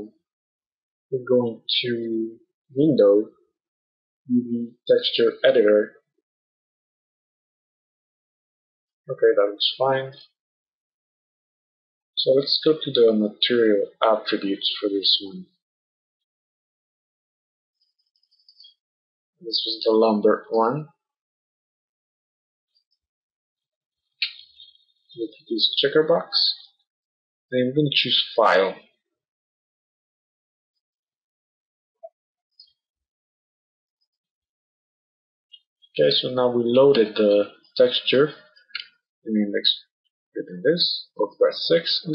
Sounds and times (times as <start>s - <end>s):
Speech: 1.2s - 3.3s, 4.3s - 6.0s, 9.1s - 10.3s, 12.2s - 15.5s, 19.4s - 20.9s, 25.2s - 26.6s, 27.6s - 28.8s, 36.0s - 38.4s, 39.3s - 42.1s.